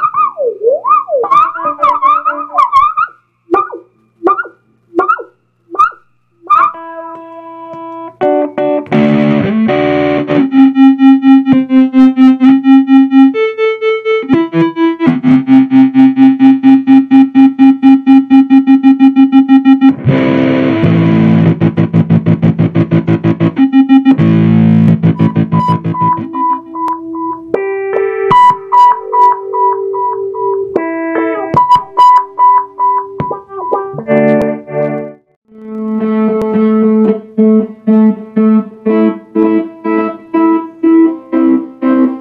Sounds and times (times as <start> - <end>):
Effects unit: 0.0 - 42.2.